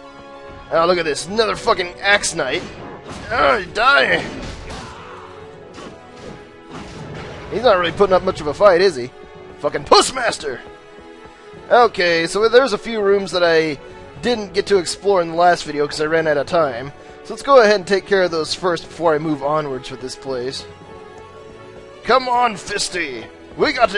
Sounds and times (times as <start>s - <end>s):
Music: 0.0s - 23.9s
Speech: 0.7s - 2.6s, 3.2s - 4.4s, 7.6s - 10.6s, 11.7s - 20.6s, 22.1s - 23.9s.